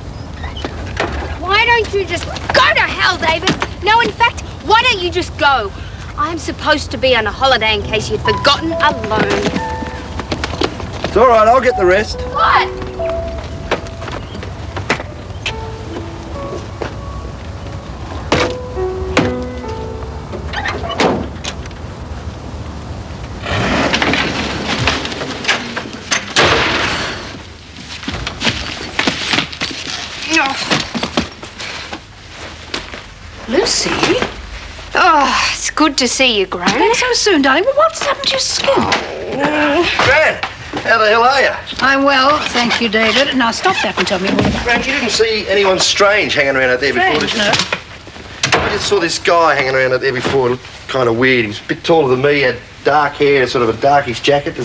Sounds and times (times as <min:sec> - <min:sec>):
Music: 0:08.1 - 0:21.0.